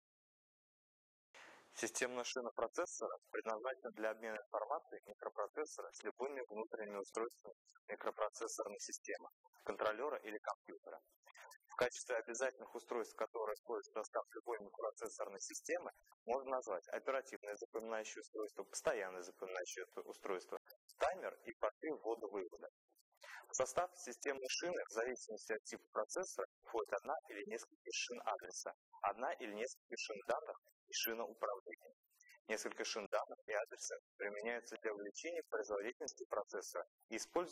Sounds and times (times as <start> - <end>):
Speech: 1.8 - 37.5.